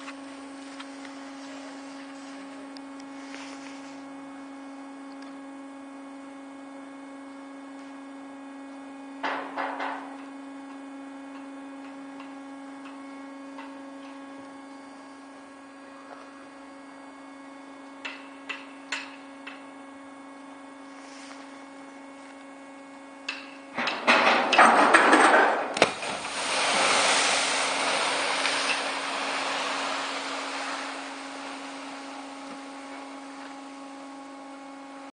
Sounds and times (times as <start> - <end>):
Motorboat, speedboat: 0.0 - 18.2, 25.9 - 35.1
Waves, surf: 25.9 - 33.2.